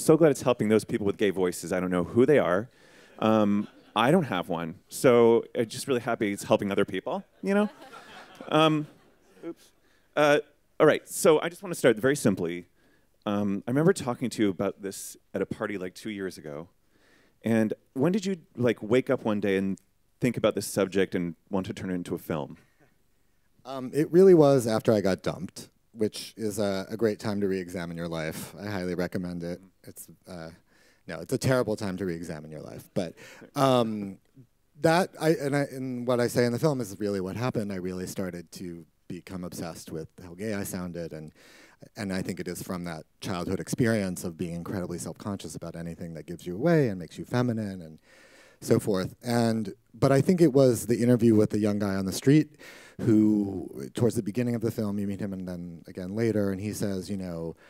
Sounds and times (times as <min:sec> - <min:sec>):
Speech: 0:00.0 - 0:07.8, 0:08.5 - 0:16.7, 0:17.4 - 0:22.6, 0:23.7 - 0:34.2, 0:34.8 - 0:48.0, 0:48.6 - 0:57.6.